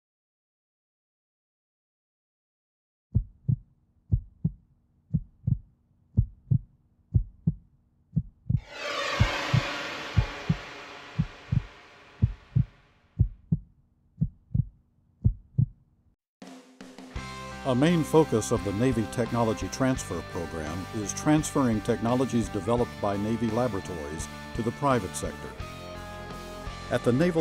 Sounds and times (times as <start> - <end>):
Music: 8.6 - 12.4, 16.4 - 27.4
Pulse: 8.6 - 12.8.